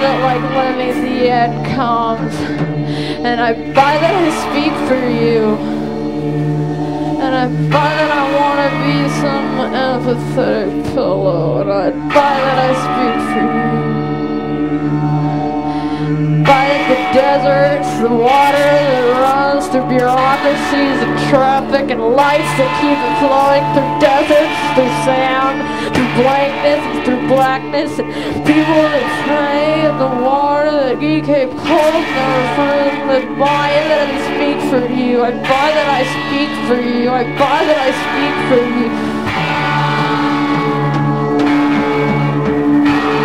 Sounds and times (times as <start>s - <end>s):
Guitar: 0.0s - 43.2s
Heavy metal: 0.0s - 43.2s.